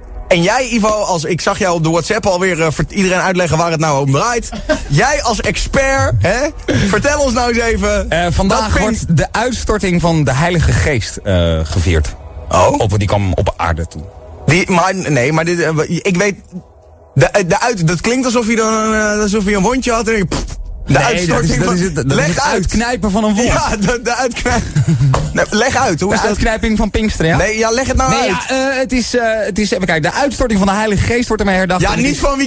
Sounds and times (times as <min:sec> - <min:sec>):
Music: 0:00.0 - 0:32.4
Speech: 0:00.3 - 0:16.6, 0:17.2 - 0:32.4.